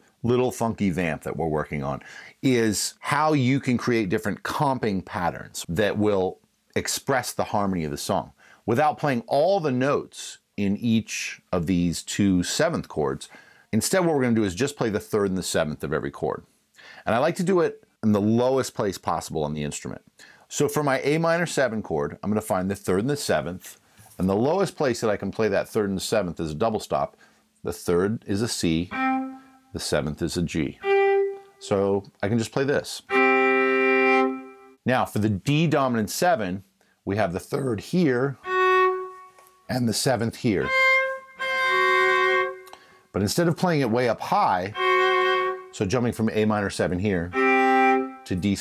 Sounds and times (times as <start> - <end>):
Speech: 0.0 - 29.0, 29.8 - 30.8, 31.6 - 33.1, 34.8 - 38.4, 39.7 - 40.7, 43.1 - 44.8, 45.7 - 47.4, 48.2 - 48.6
Violin, fiddle: 28.7 - 30.0, 30.6 - 32.0, 32.9 - 34.8, 38.4 - 42.8, 44.2 - 48.6.